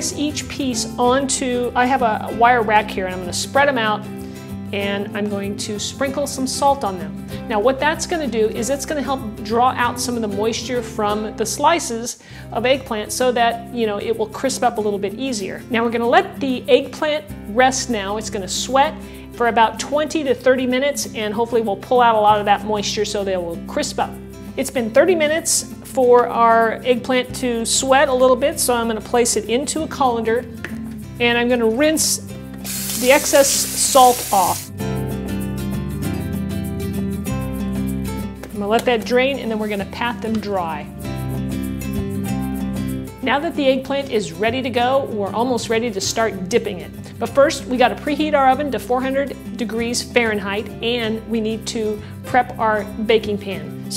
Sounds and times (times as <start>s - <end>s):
Speech: 0.0s - 4.0s, 4.8s - 30.5s, 31.2s - 32.2s, 33.0s - 34.6s, 38.6s - 40.9s, 43.2s - 53.9s
Music: 0.0s - 53.9s.